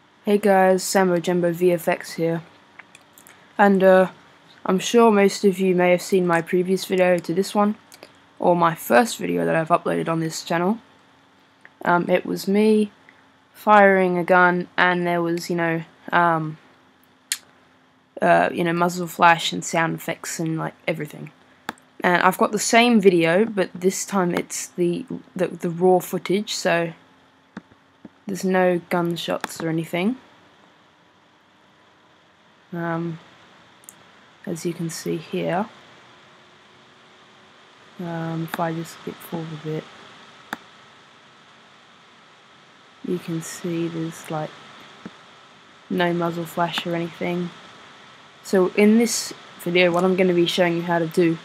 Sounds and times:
Speech: 0:00.2 - 0:02.5, 0:03.6 - 0:10.8, 0:11.8 - 0:13.0, 0:13.6 - 0:16.6, 0:18.2 - 0:21.3, 0:22.0 - 0:27.0, 0:28.2 - 0:30.2, 0:32.7 - 0:33.2, 0:34.5 - 0:35.7, 0:38.0 - 0:39.8, 0:43.0 - 0:44.5, 0:45.9 - 0:47.6, 0:48.5 - 0:51.4.

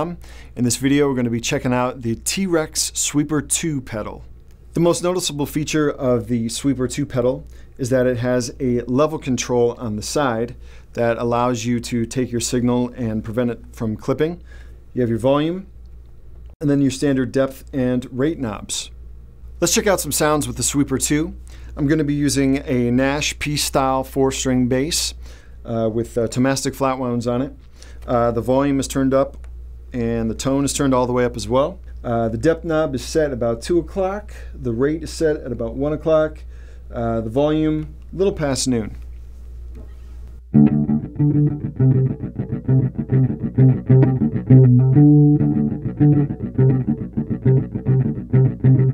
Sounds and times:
Speech: 0:00.0 - 0:14.4, 0:15.0 - 0:15.7, 0:16.6 - 0:19.0, 0:19.6 - 0:39.0.

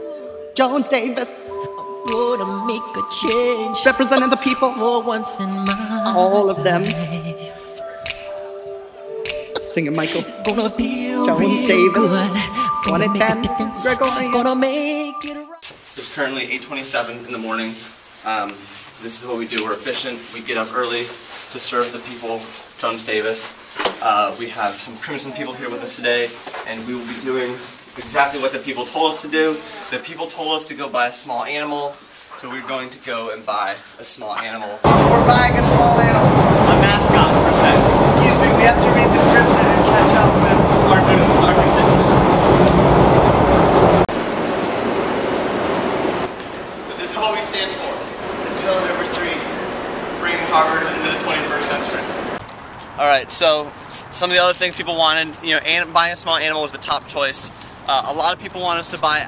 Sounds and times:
Speech: 0:02.1 - 0:07.7, 0:09.6 - 0:42.0, 0:46.9 - 0:49.6, 0:50.2 - 0:52.1, 0:53.0 - 0:59.2.

